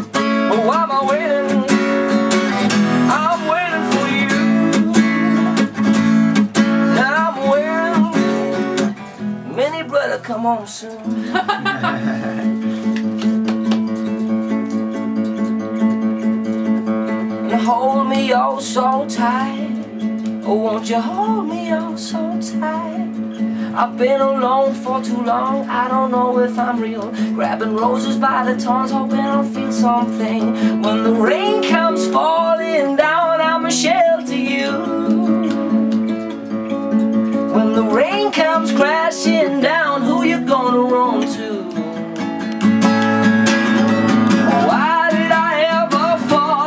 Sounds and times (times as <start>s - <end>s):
Singing: 0.0s - 5.7s, 6.9s - 8.6s, 17.4s - 36.0s, 37.5s - 41.8s, 44.4s - 46.6s
Music: 0.0s - 46.6s.